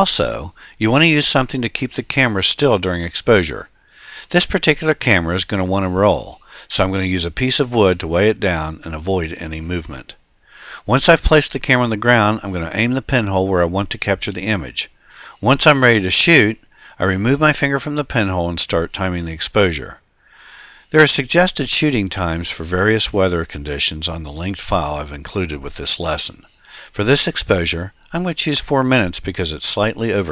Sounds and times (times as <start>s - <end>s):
Speech: 0.0s - 10.2s, 10.8s - 20.0s, 20.9s - 30.3s.